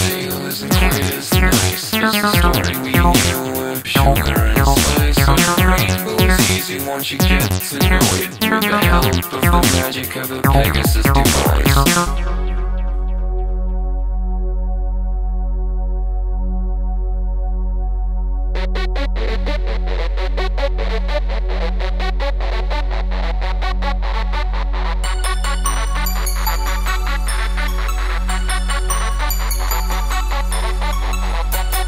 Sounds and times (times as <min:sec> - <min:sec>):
Dubstep: 0:00.0 - 0:12.8.